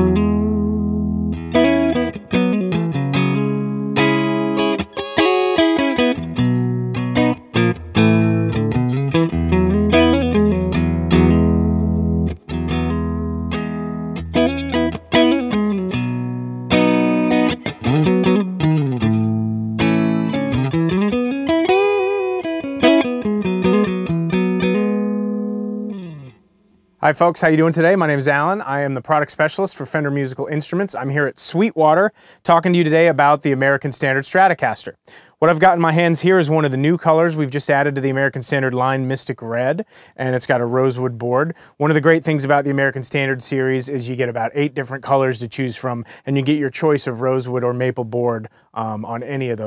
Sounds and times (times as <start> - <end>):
Speech: 27.0 - 49.6.